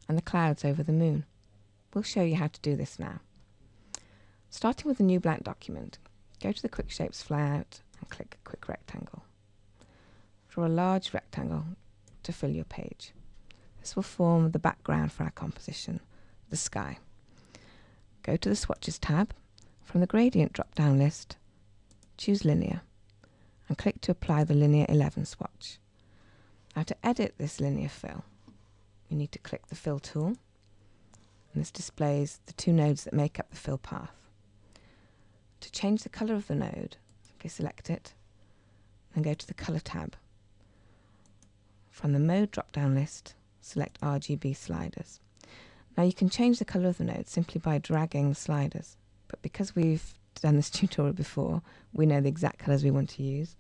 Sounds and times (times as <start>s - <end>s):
Speech: 0.0s - 1.3s, 2.0s - 3.3s, 4.5s - 9.3s, 10.5s - 13.2s, 13.8s - 17.1s, 18.2s - 21.4s, 22.2s - 22.9s, 23.7s - 25.8s, 26.8s - 28.3s, 29.1s - 30.4s, 31.5s - 34.3s, 35.6s - 38.2s, 39.1s - 40.3s, 41.9s - 45.2s, 46.0s - 53.6s.